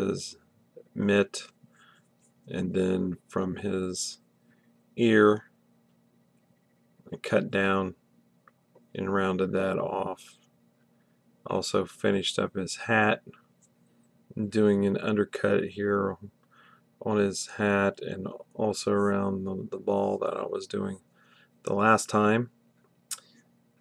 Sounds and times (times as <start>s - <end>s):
Speech: 0.0s - 1.6s, 2.5s - 4.2s, 5.0s - 5.5s, 7.1s - 8.0s, 8.9s - 10.4s, 11.4s - 13.4s, 14.3s - 16.4s, 17.0s - 21.0s, 21.6s - 22.6s.